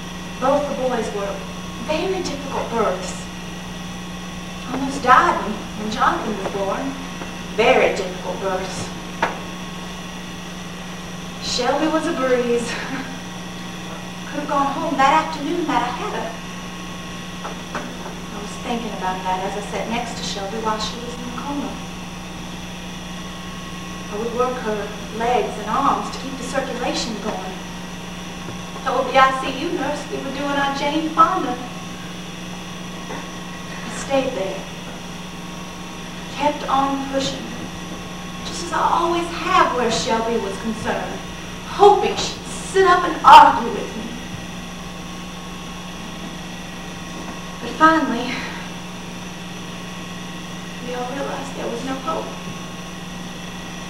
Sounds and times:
Narration, monologue: 0.0s - 53.8s.

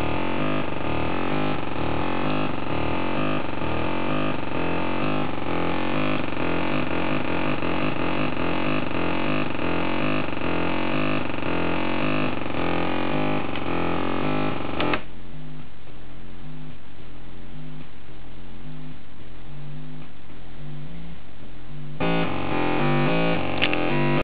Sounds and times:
Sampler: 0.0s - 15.7s, 21.7s - 24.2s.

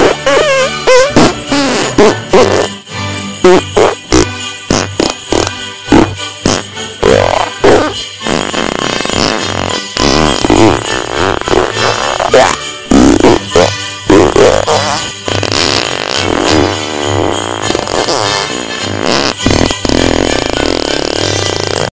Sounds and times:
Jingle bell: 2.5s - 8.3s, 15.5s - 19.4s.

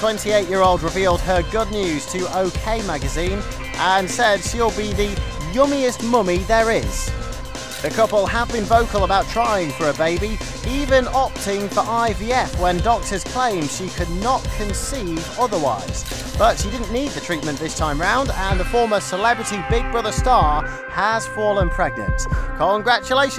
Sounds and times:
Speech: 0.0s - 7.1s, 7.8s - 23.3s
Music: 0.0s - 23.3s.

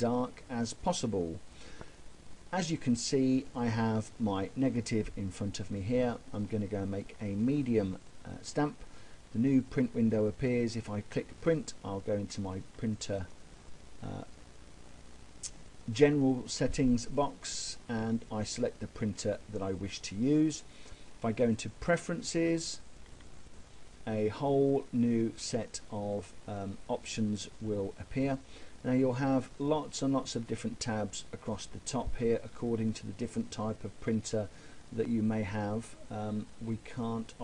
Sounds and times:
Speech: 0.0s - 1.4s, 2.5s - 13.3s, 14.0s - 14.4s, 15.4s - 22.8s, 24.0s - 37.4s.

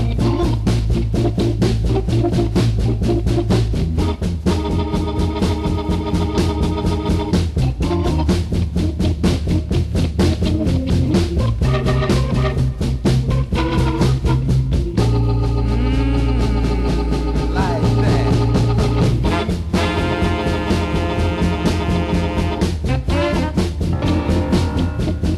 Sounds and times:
Music: 0.0s - 25.3s.

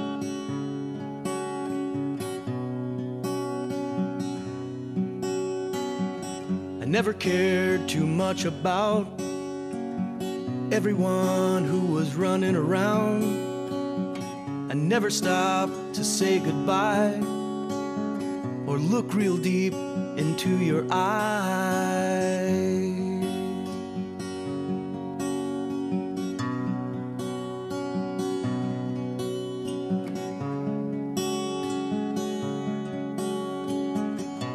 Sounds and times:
Music: 0.0s - 34.5s.

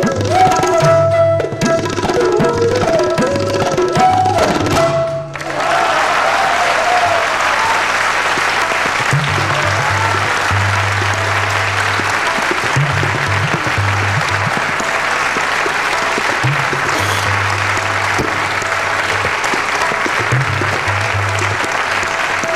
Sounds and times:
Tabla: 0.0s - 5.8s, 6.4s - 22.5s.

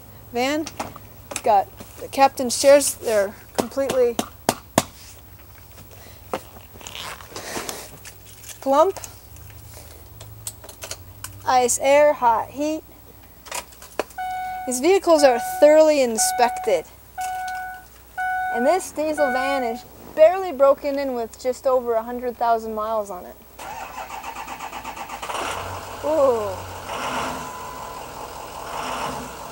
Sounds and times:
Truck: 0.0s - 22.9s, 23.6s - 29.5s
Speech: 1.4s - 4.2s, 11.5s - 12.8s, 14.7s - 16.9s, 18.6s - 23.4s, 26.1s - 26.6s.

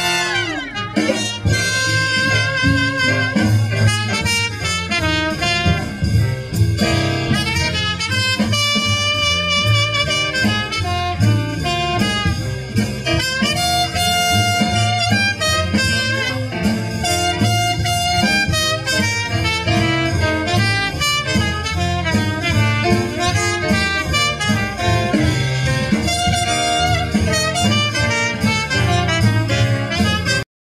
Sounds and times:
Trumpet: 0.0s - 30.5s.

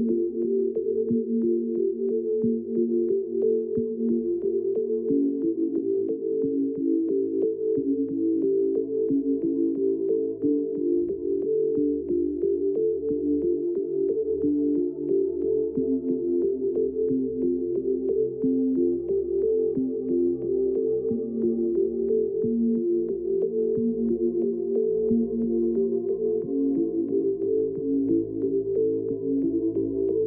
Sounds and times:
Background music: 0.0s - 30.2s.

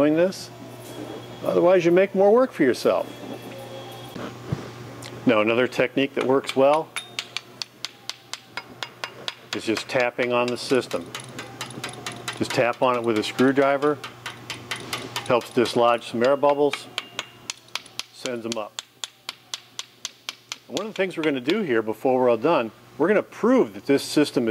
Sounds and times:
Speech: 0.0s - 0.6s, 1.4s - 3.1s, 5.3s - 6.9s, 9.6s - 11.0s, 12.4s - 14.0s, 15.3s - 16.9s, 18.2s - 18.8s, 20.7s - 24.5s
Inside, large room or hall: 6.2s - 21.4s.

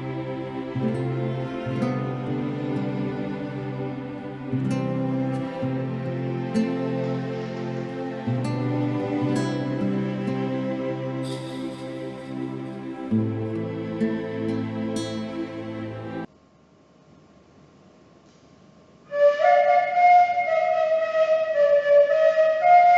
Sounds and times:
Musical instrument: 0.0s - 16.3s
Sad music: 0.0s - 16.3s.

